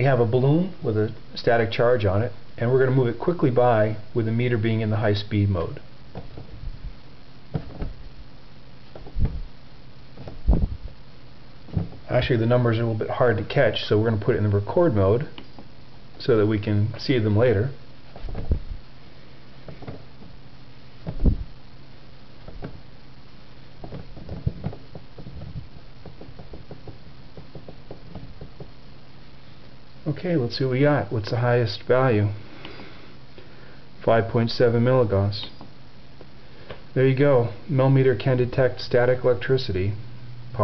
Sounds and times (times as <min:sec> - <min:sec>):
Speech: 0:00.0 - 0:05.9, 0:12.1 - 0:15.4, 0:16.2 - 0:17.8, 0:30.0 - 0:32.4, 0:34.0 - 0:35.6, 0:37.0 - 0:40.0.